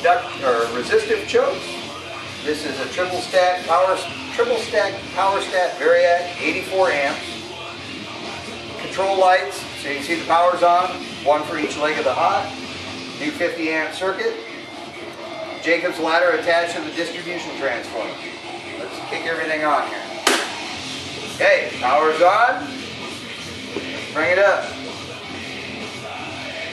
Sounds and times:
Speech: 0:02.5 - 0:07.2, 0:08.8 - 0:12.5, 0:13.2 - 0:14.4, 0:15.6 - 0:18.2, 0:18.8 - 0:20.1, 0:21.4 - 0:22.7, 0:24.1 - 0:24.8.

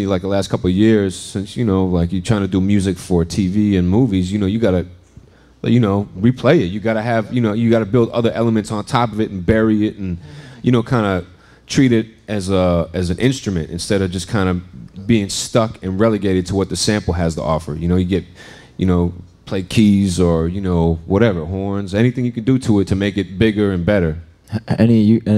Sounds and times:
Speech: 0:00.0 - 0:05.0, 0:05.6 - 0:25.3.

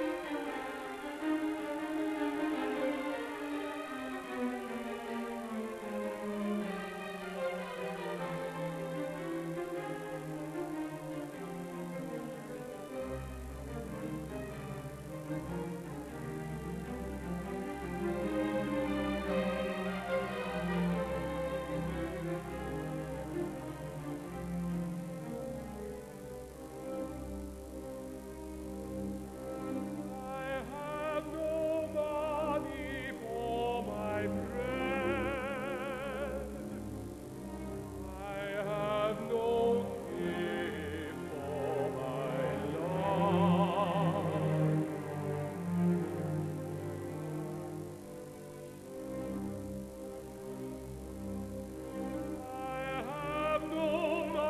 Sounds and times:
Music: 0:00.0 - 0:54.4.

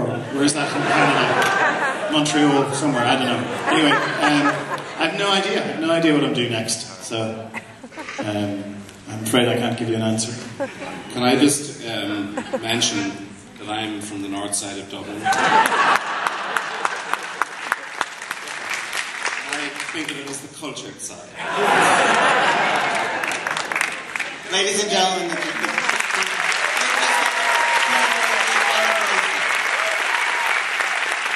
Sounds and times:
Speech: 0:11.1 - 0:15.3, 0:19.5 - 0:21.3, 0:24.5 - 0:27.2
Applause: 0:15.6 - 0:20.4, 0:22.8 - 0:31.3.

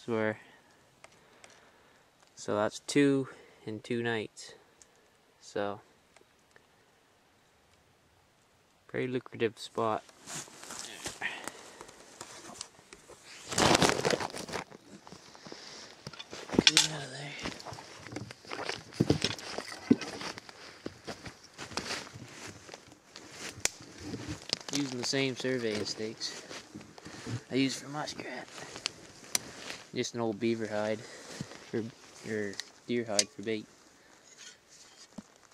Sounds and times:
Speech: 0:00.0 - 0:00.4, 0:02.4 - 0:04.6, 0:05.4 - 0:05.8, 0:08.9 - 0:10.0, 0:16.6 - 0:17.6, 0:24.7 - 0:26.4, 0:27.5 - 0:28.5, 0:30.0 - 0:31.1, 0:31.7 - 0:33.7.

